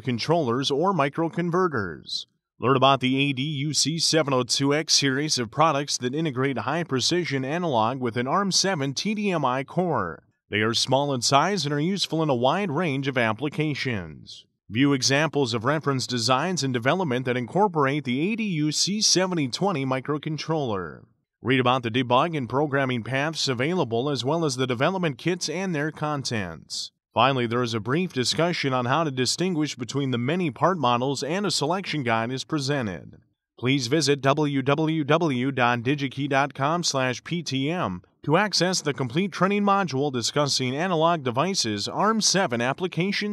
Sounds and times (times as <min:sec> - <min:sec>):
Speech: 0:00.0 - 0:43.3.